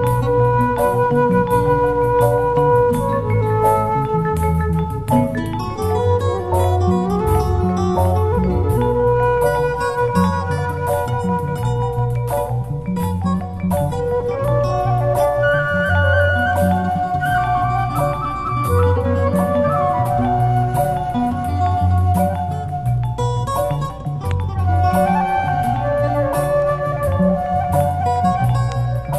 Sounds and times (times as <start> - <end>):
Jazz: 0.0 - 29.1
Mandolin: 0.0 - 29.1.